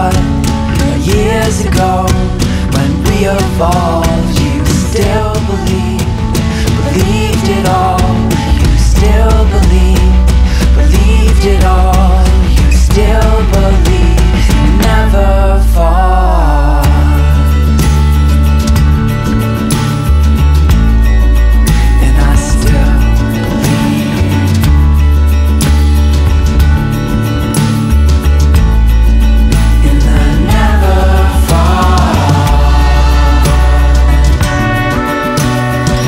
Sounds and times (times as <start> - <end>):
Independent music: 0.0 - 36.0.